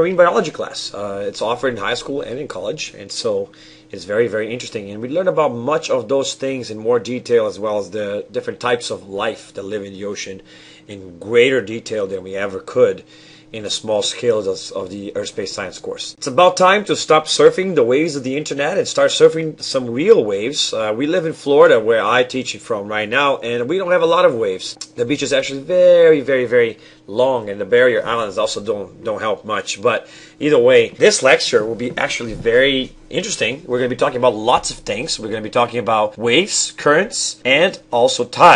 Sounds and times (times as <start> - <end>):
Speech: 0.0 - 38.5.